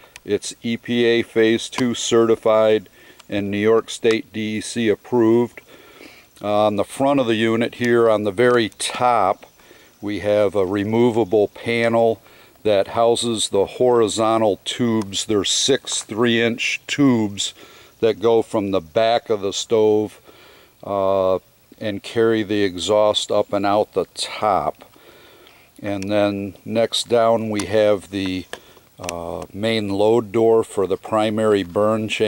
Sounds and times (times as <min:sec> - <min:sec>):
Speech: 0:00.2 - 0:05.6, 0:06.4 - 0:20.2, 0:20.8 - 0:24.9, 0:25.8 - 0:32.2.